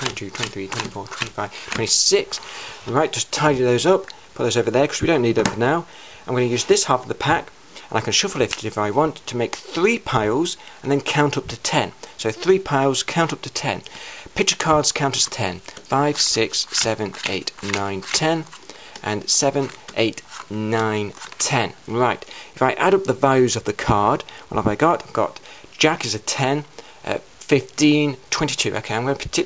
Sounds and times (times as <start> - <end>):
Speech: 0.0 - 29.4.